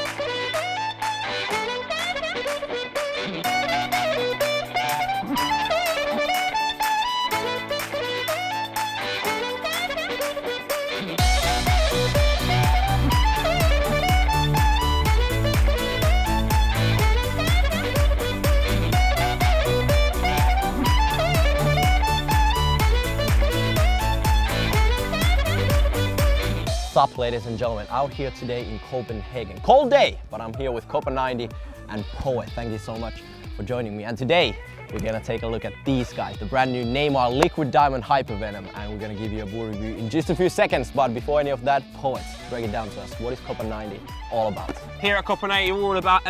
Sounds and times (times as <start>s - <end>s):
Music: 0.0s - 46.2s
Speech: 26.9s - 46.2s.